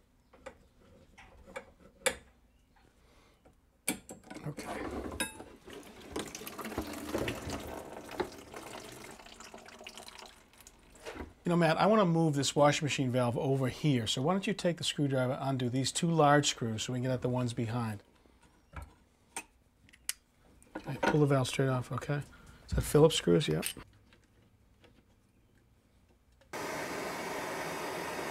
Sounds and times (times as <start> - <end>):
Speech: 4.4 - 4.9, 11.4 - 18.0, 20.8 - 23.8
Water tap, faucet: 5.6 - 11.0.